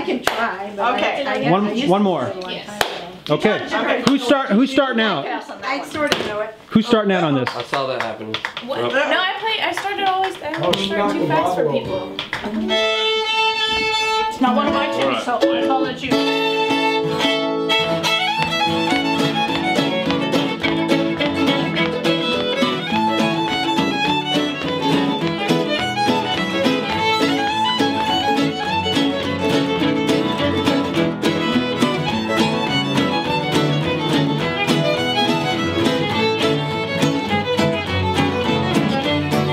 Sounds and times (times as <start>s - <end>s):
Violin, fiddle: 12.5s - 39.5s.